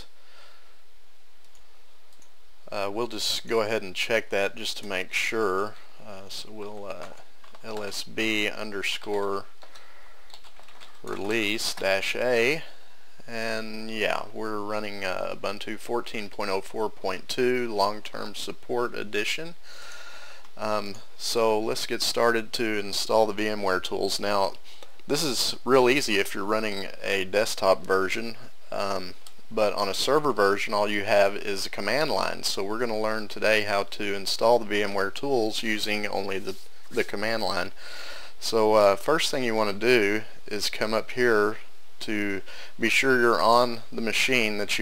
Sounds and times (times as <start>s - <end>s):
Speech: 2.7s - 9.5s, 11.0s - 19.6s, 20.6s - 37.8s, 38.4s - 44.8s.